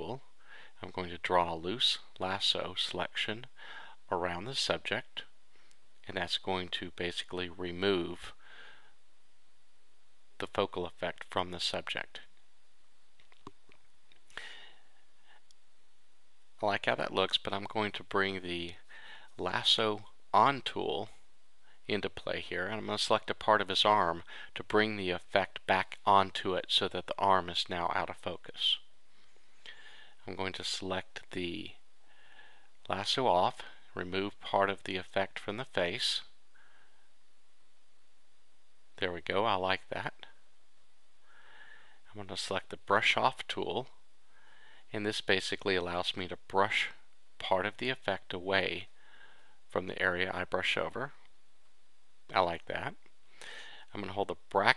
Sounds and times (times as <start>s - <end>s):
Speech: 0.0s - 5.4s, 6.0s - 8.4s, 10.4s - 12.4s, 16.6s - 21.2s, 21.8s - 28.9s, 30.2s - 31.8s, 32.8s - 36.4s, 39.0s - 40.4s, 42.1s - 44.0s, 44.9s - 49.0s, 49.7s - 51.3s, 52.3s - 53.1s, 53.8s - 54.7s.